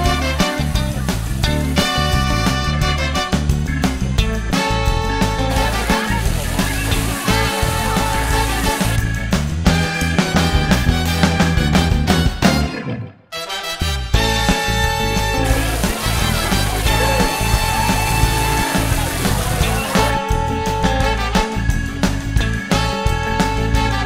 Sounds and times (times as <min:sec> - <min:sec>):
Water: 0:00.0 - 0:03.4, 0:05.2 - 0:09.2, 0:14.2 - 0:20.4
Music: 0:00.0 - 0:24.0.